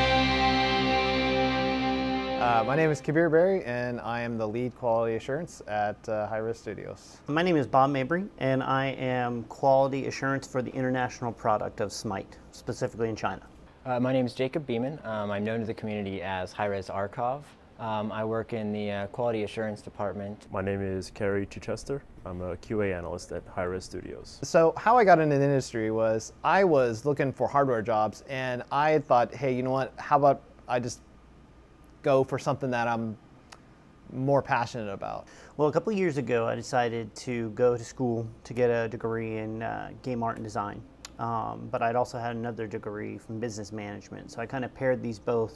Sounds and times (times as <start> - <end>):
Speech: 2.4 - 31.1, 32.0 - 33.2, 34.1 - 45.5.